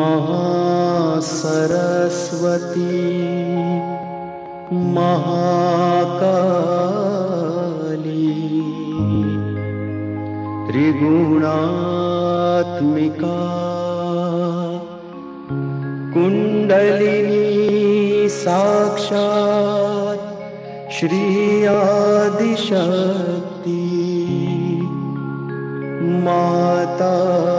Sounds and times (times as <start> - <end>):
Mantra: 0.0 - 9.4, 10.7 - 15.0, 16.1 - 25.1, 26.0 - 27.5.